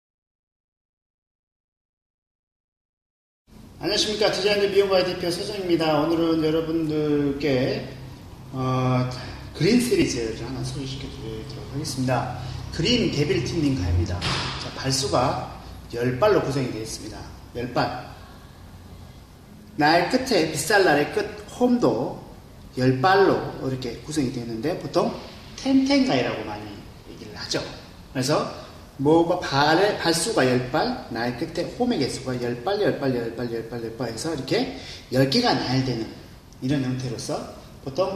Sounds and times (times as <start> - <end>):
Male speech, man speaking: 3.8 - 18.1, 19.8 - 22.2, 22.8 - 38.1.